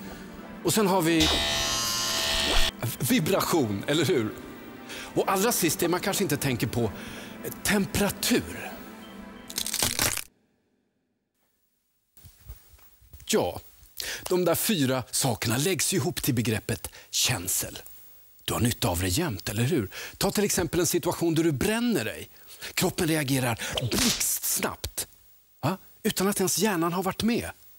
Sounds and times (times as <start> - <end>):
Speech: 0.6 - 1.2, 2.8 - 4.4, 5.2 - 8.8, 13.2 - 13.6, 14.2 - 17.8, 18.4 - 27.6.